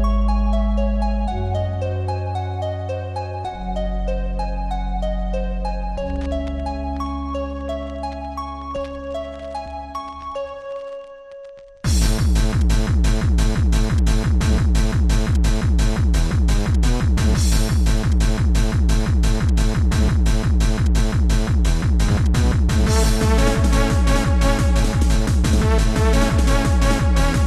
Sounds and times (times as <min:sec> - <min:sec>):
Dance music: 0:11.9 - 0:27.4
Exciting music: 0:11.9 - 0:27.4.